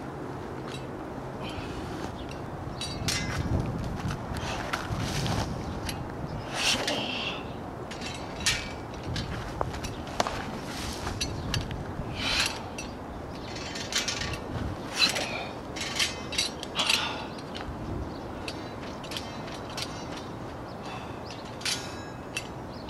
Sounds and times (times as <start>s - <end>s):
Outside, rural or natural: 0.0s - 22.9s.